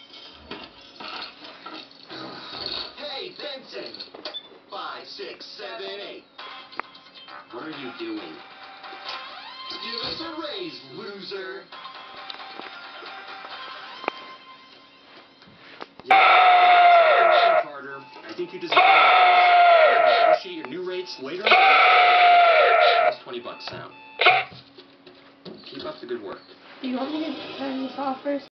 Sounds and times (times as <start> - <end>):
Buzzer: 23.5 - 24.6.